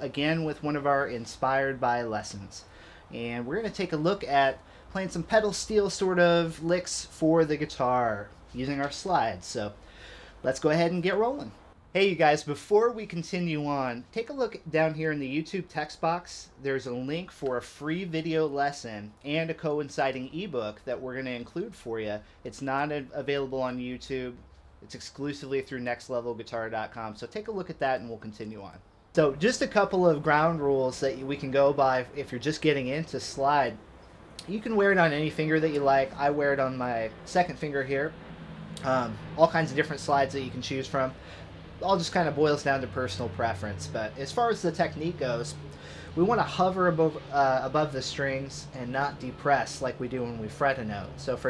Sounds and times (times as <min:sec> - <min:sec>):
Speech: 0:00.0 - 0:09.8, 0:10.4 - 0:33.8, 0:34.4 - 0:38.2, 0:38.8 - 0:41.2, 0:41.8 - 0:51.5.